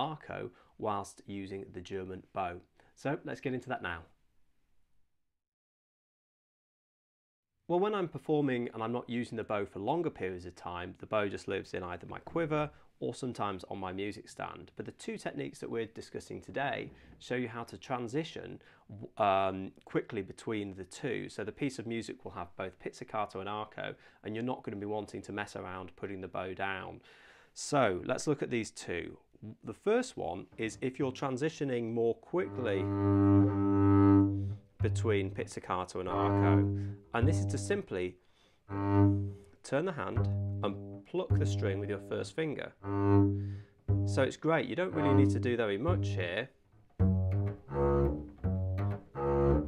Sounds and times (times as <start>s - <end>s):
Speech: 0.0s - 4.2s, 7.7s - 27.0s, 27.6s - 33.0s, 34.8s - 38.2s, 39.6s - 42.8s, 44.1s - 46.6s.